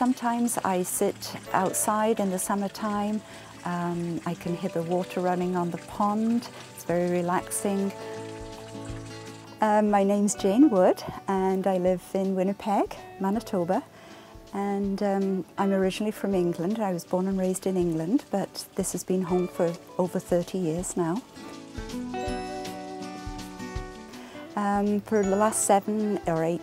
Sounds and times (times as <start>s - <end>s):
Speech: 0.0s - 7.9s, 9.6s - 13.8s, 14.6s - 21.2s, 24.6s - 26.6s
Music: 0.0s - 26.6s.